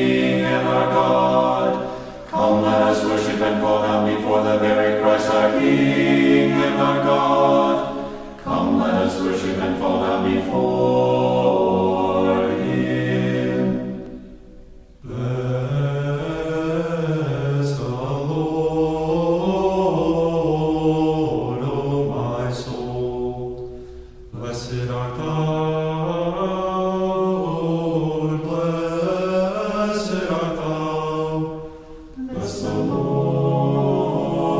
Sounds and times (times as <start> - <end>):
Chant: 0.0 - 14.4, 15.0 - 34.5.